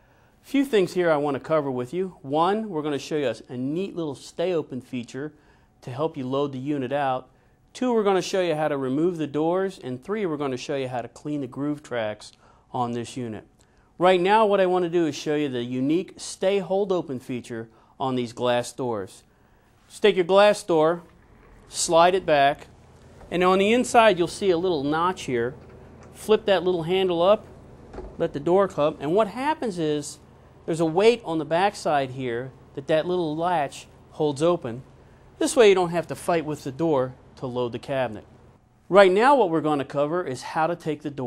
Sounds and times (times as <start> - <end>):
Speech: 0.5 - 19.3, 19.9 - 21.1, 21.7 - 22.7, 23.3 - 25.6, 26.2 - 27.4, 28.2 - 38.3, 38.9 - 41.2.